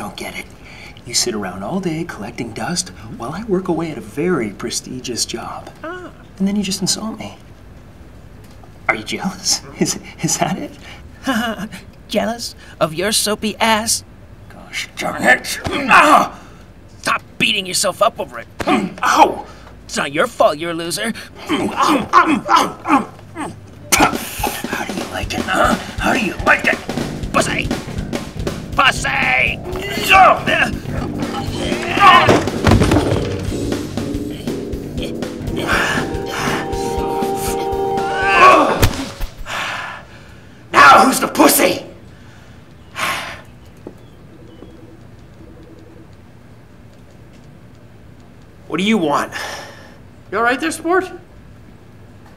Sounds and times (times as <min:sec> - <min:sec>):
Speech: 0:23.4 - 0:26.8, 0:27.4 - 0:27.7, 0:28.8 - 0:32.3, 0:40.8 - 0:42.0, 0:50.3 - 0:51.3
Music: 0:23.8 - 0:39.2.